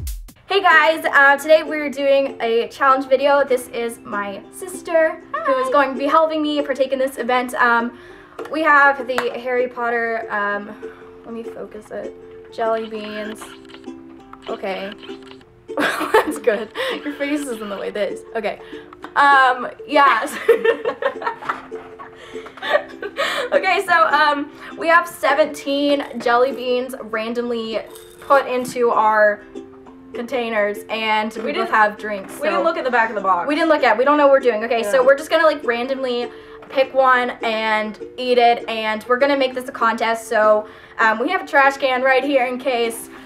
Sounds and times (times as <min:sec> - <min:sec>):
Music: 0:00.0 - 0:43.2.